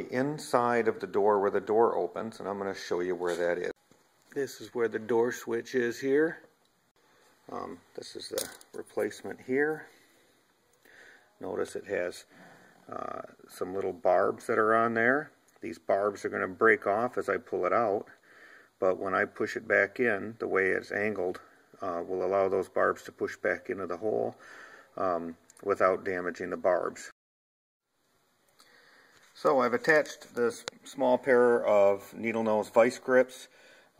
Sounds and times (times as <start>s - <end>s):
Speech: 0.0s - 6.5s, 7.5s - 9.9s, 11.4s - 12.3s, 12.9s - 18.2s, 18.8s - 24.4s, 25.0s - 27.2s, 29.4s - 33.5s.